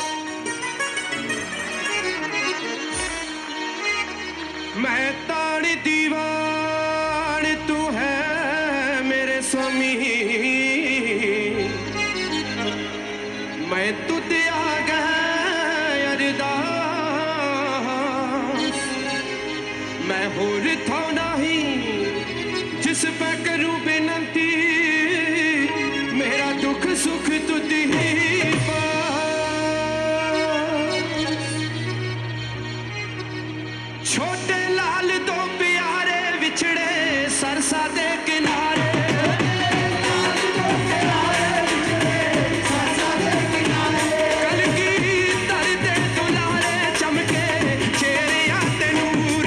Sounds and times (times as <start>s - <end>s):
Music: 0.0s - 49.4s.